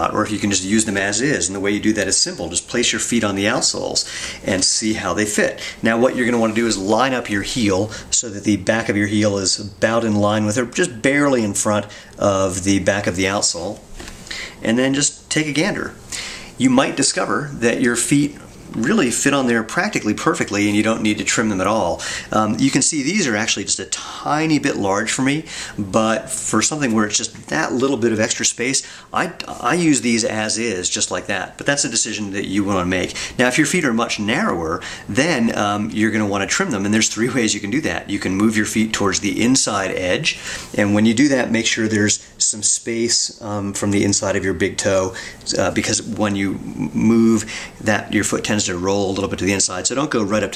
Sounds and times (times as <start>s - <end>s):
Speech: 0.0s - 13.9s, 14.6s - 16.0s, 16.6s - 50.5s
Inside, small room: 0.0s - 50.5s.